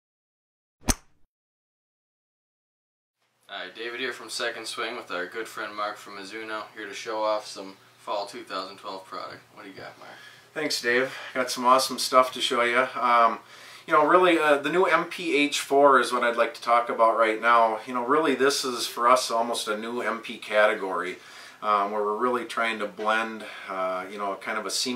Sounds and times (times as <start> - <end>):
Inside, small room: 3.2 - 24.9
Speech: 3.5 - 24.9.